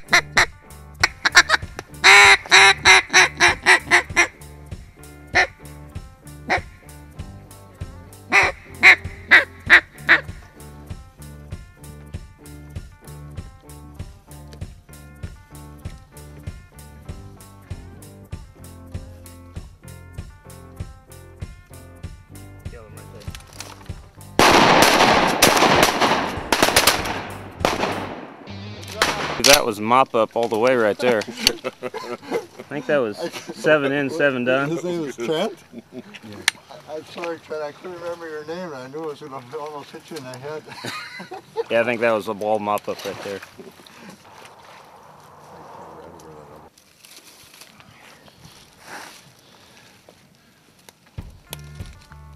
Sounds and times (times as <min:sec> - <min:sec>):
Outside, rural or natural: 0:00.0 - 0:52.3
Speech: 0:29.0 - 0:31.3, 0:41.7 - 0:43.5.